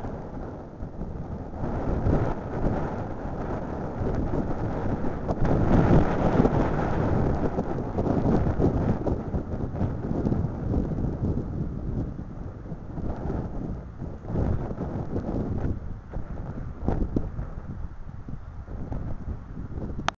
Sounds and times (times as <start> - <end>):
Wind noise (microphone): 0.0 - 20.1.